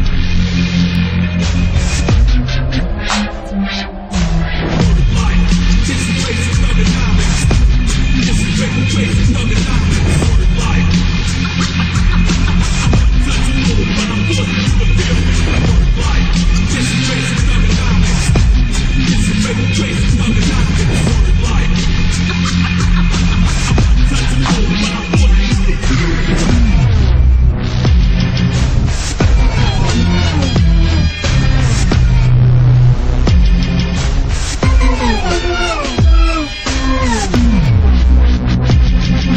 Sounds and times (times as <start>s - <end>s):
Music: 0.0s - 39.3s.